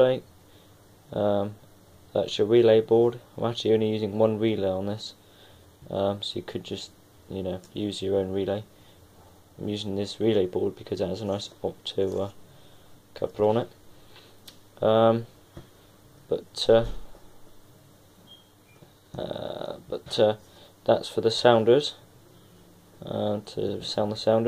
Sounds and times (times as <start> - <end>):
Speech: 0.0 - 0.3, 1.1 - 5.2, 5.9 - 8.7, 9.6 - 12.4, 13.2 - 13.8, 14.8 - 15.3, 16.3 - 17.0, 19.2 - 22.0, 23.0 - 24.4.